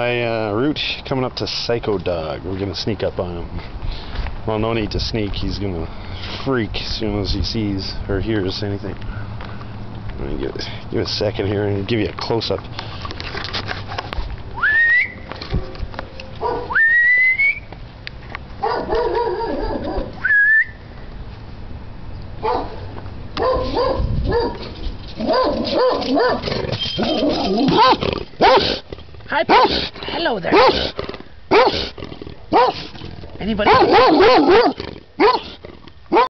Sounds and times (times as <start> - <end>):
Bow-wow: 16.4 - 16.8, 18.6 - 20.1, 23.4 - 24.6, 25.2 - 28.8, 29.5 - 29.9, 30.5 - 31.9, 32.5 - 32.9, 33.6 - 36.2
Yip: 16.4 - 16.8, 18.6 - 20.1, 23.4 - 24.6, 25.2 - 28.8, 32.6 - 32.9, 33.7 - 36.2.